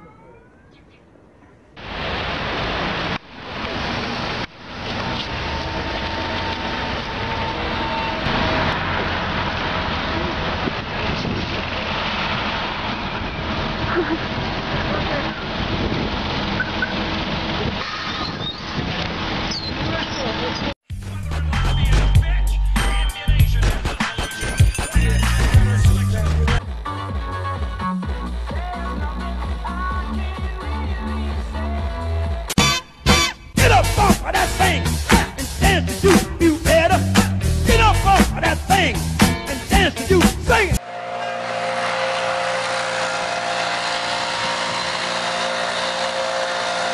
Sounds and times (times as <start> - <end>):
Vehicle: 1.9 - 20.8, 40.8 - 46.9.